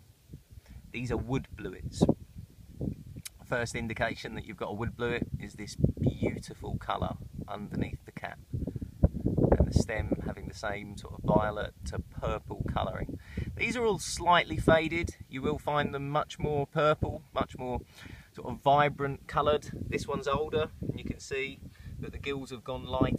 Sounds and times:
Speech: 0.9 - 2.1, 3.3 - 8.4, 9.6 - 17.8, 18.4 - 23.1.

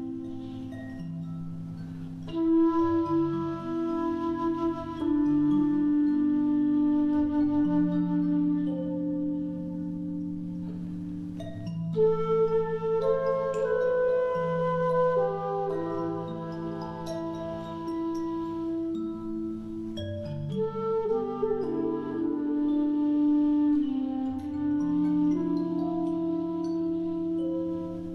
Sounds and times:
Music: 0.0 - 28.1.

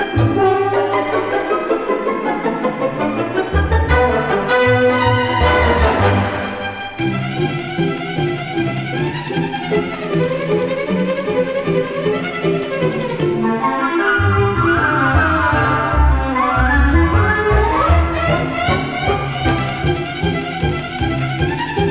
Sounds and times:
Music: 0.0 - 21.9.

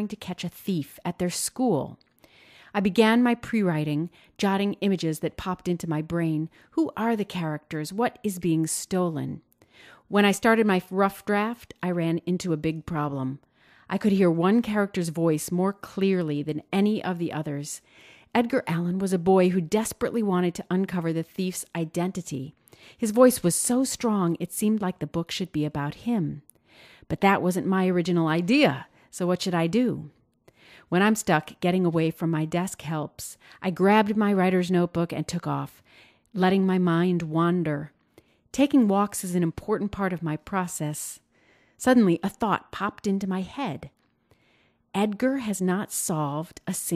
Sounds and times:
Speech: 0.0 - 2.0, 2.8 - 9.4, 10.1 - 17.8, 18.4 - 26.5, 27.1 - 30.1, 30.9 - 35.8, 36.4 - 37.9, 38.6 - 41.2, 41.8 - 43.9, 45.0 - 46.9.

